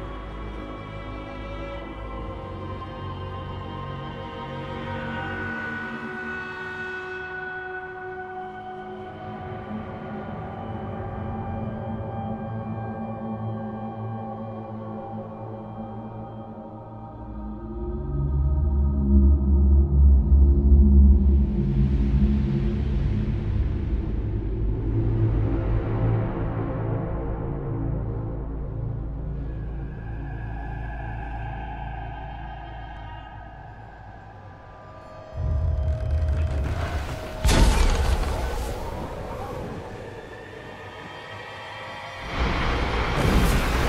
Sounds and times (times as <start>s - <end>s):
Music: 0.0s - 43.8s.